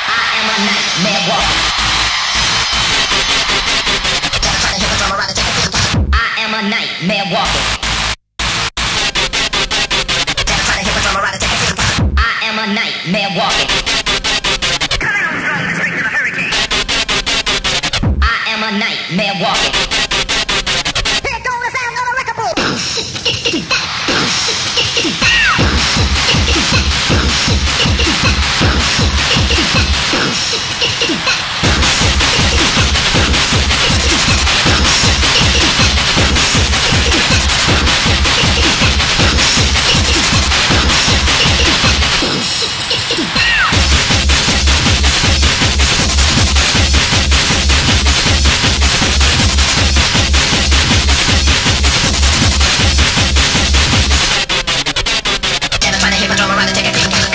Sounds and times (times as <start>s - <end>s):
Cacophony: 0.0s - 6.1s, 7.5s - 21.3s, 22.6s - 57.3s
Music: 0.0s - 6.3s, 7.2s - 57.3s.